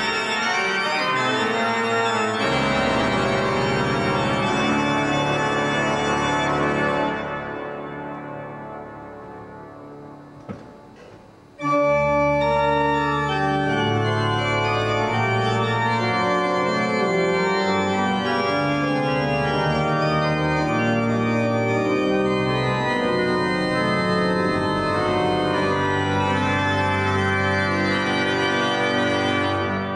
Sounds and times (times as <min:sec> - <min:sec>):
Hammond organ: 0:00.0 - 0:29.9.